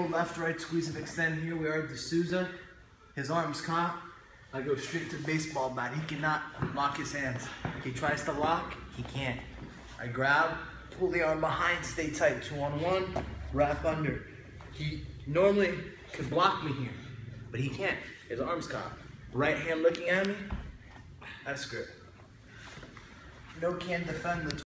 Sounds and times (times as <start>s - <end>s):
Speech: 4.6s - 20.5s, 23.6s - 24.6s.